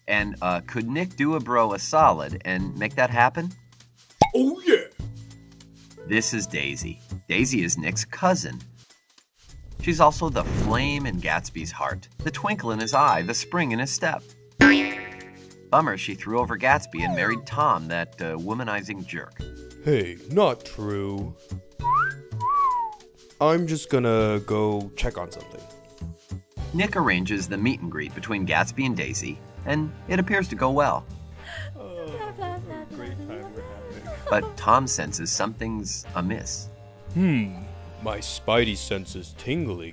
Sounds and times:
Speech: 0.0s - 3.6s, 6.1s - 8.6s, 9.8s - 14.2s, 15.8s - 21.3s, 23.4s - 25.7s, 26.7s - 31.0s, 31.8s - 39.9s
Music: 0.0s - 39.9s
Boing: 14.6s - 15.4s.

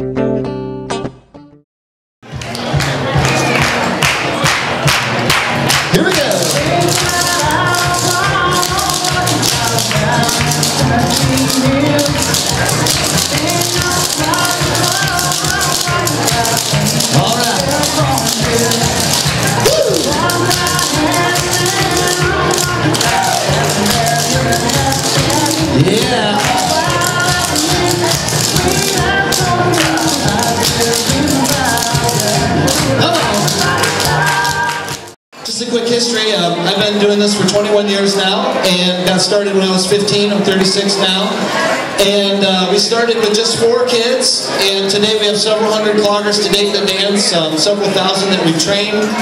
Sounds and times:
Music: 0.0s - 1.6s, 2.2s - 49.2s.

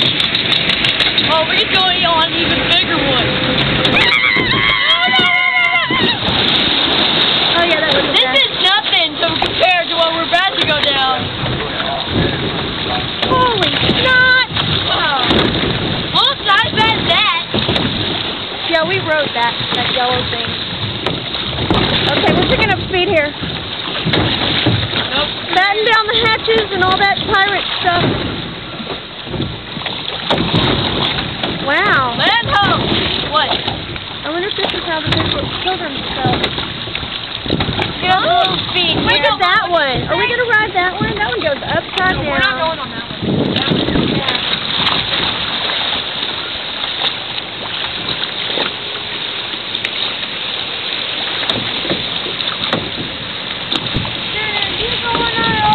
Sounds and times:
Water: 0.0s - 55.7s.

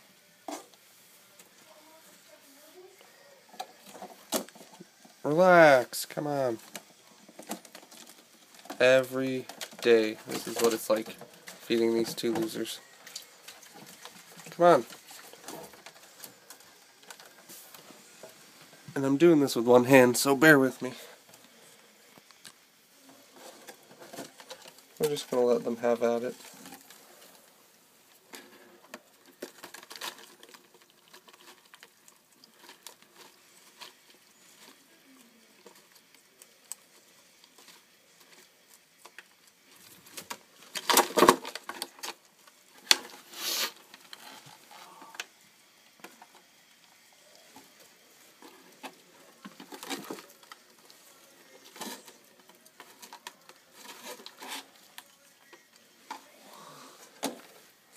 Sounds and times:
Speech: 5.2s - 6.6s, 8.8s - 12.8s, 14.5s - 14.9s, 19.0s - 21.2s, 25.0s - 26.4s.

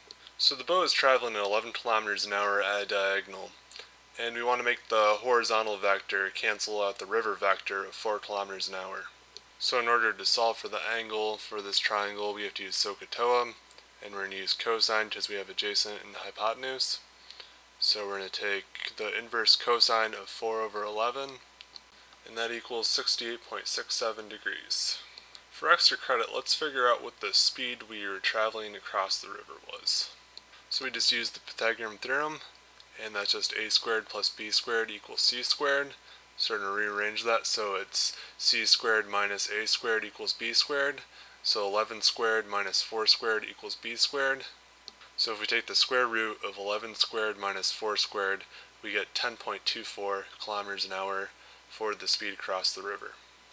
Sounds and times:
Speech: 0.4s - 17.0s, 17.8s - 21.4s, 22.2s - 44.6s, 45.2s - 53.2s.

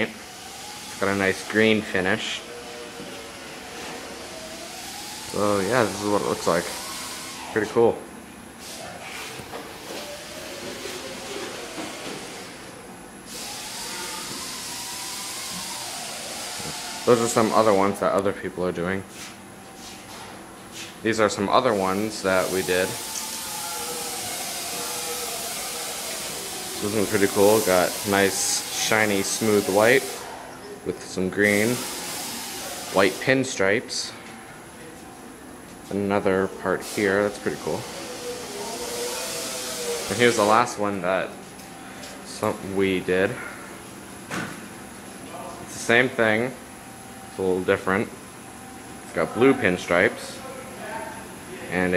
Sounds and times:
Speech: 1.0s - 2.5s, 5.3s - 6.8s, 7.6s - 8.0s, 17.1s - 19.1s, 21.0s - 23.0s, 26.8s - 30.2s, 30.8s - 31.8s, 32.8s - 34.2s, 35.9s - 41.4s, 42.1s - 43.4s, 45.2s - 46.6s, 47.3s - 48.2s, 49.1s - 51.9s.

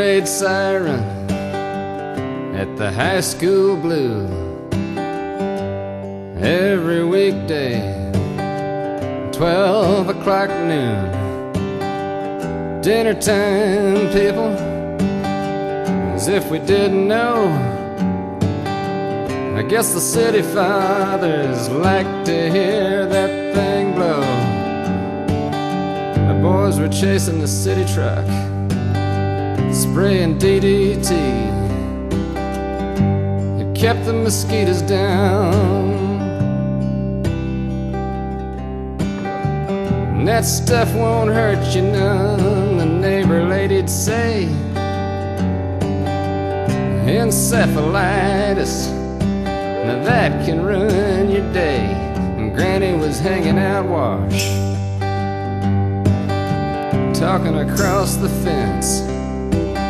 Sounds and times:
Music: 0.0s - 59.8s.

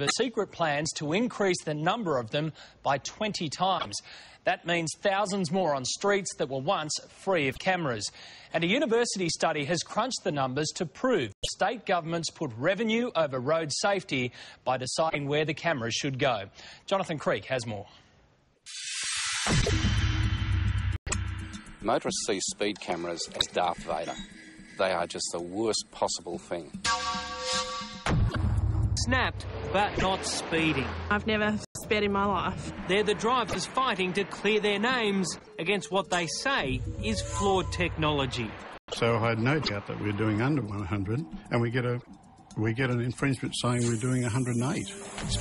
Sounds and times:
Music: 19.6s - 29.7s
Speech: 21.8s - 24.2s, 24.8s - 26.8s, 29.0s - 42.0s, 42.6s - 45.4s.

